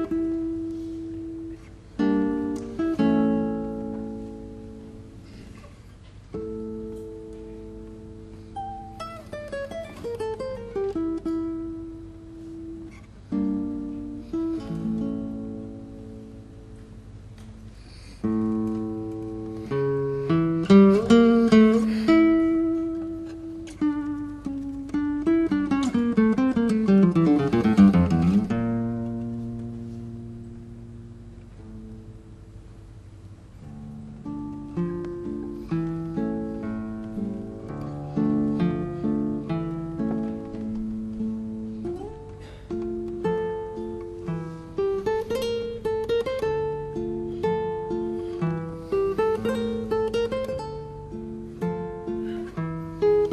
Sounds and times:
Guitar: 0.0 - 53.3.

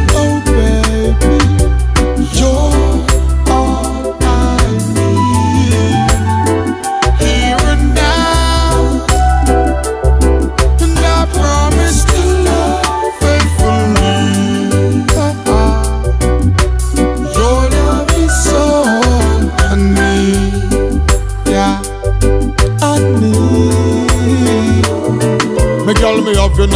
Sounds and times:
Music: 0.0 - 26.7.

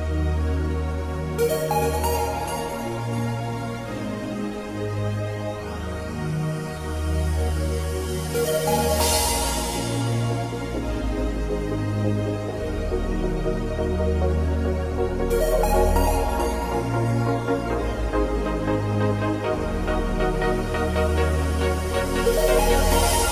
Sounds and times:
Music: 0.0 - 23.3.

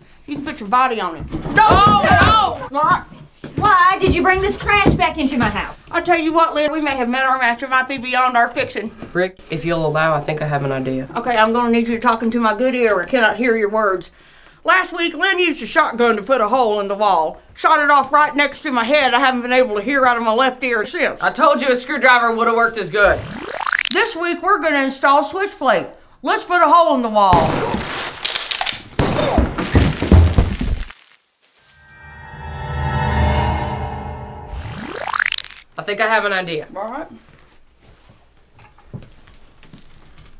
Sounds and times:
Speech: 0.3 - 23.2, 24.0 - 27.4, 35.8 - 37.2
Gunshot, gunfire: 27.4 - 28.2, 29.0 - 29.7.

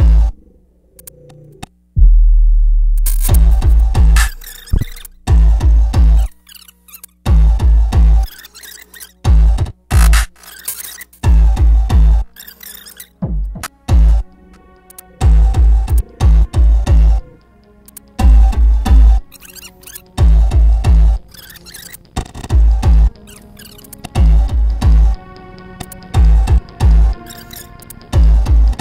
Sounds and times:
Hum: 0.0 - 6.4.

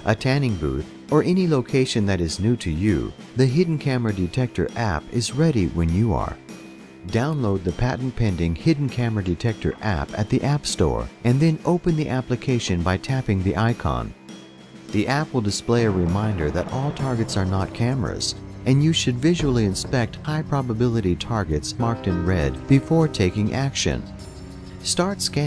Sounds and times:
Speech: 0.0 - 6.4, 7.1 - 14.2, 14.9 - 24.1, 24.8 - 25.4
Music: 0.0 - 25.4.

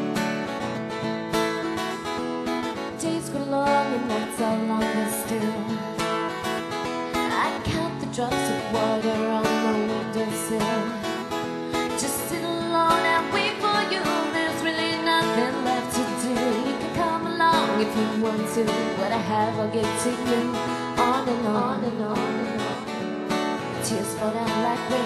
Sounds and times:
Music: 0.0 - 25.0.

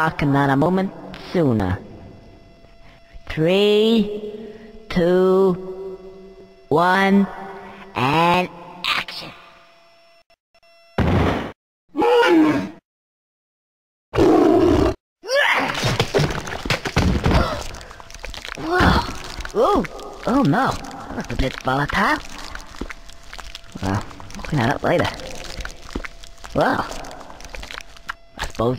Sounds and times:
Speech: 0.0 - 1.8, 3.3 - 4.2, 6.7 - 7.3, 8.0 - 9.4, 18.6 - 22.2, 23.8 - 25.3, 26.6 - 27.0, 28.4 - 28.7
Thump, thud: 11.0 - 11.6.

